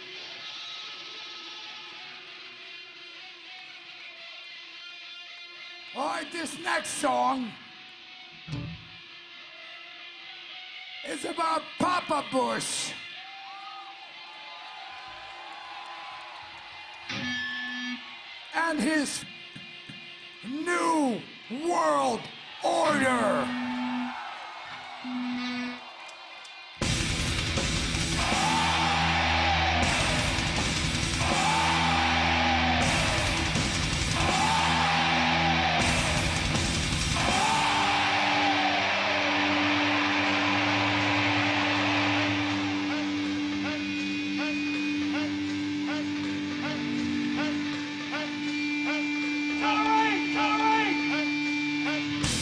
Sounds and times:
Heavy metal: 0:26.8 - 0:52.4.

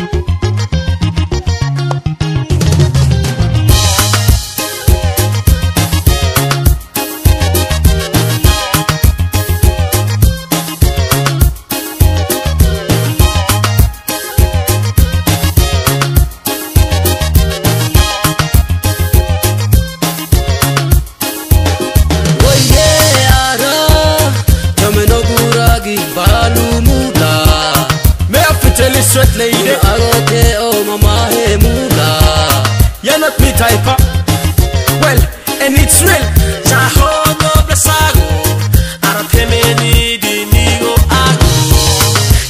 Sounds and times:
Middle Eastern music: 0:00.0 - 0:42.4.

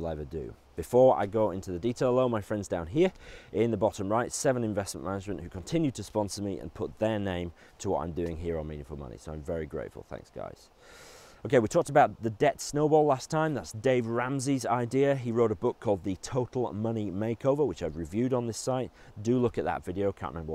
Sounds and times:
Speech: 0:00.0 - 0:10.7, 0:11.4 - 0:20.5.

